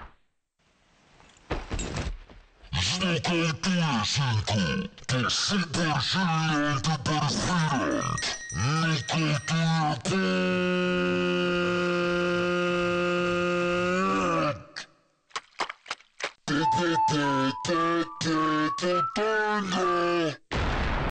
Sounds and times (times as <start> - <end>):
Speech: 2.7 - 14.9, 16.5 - 20.4
Music: 16.6 - 19.4.